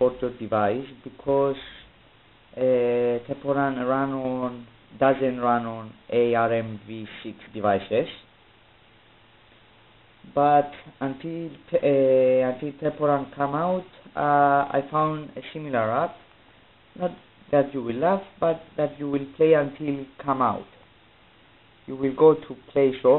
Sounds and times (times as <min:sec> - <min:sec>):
Speech: 0:00.0 - 0:01.9, 0:02.5 - 0:08.3, 0:10.2 - 0:16.3, 0:16.9 - 0:20.8, 0:21.8 - 0:23.1.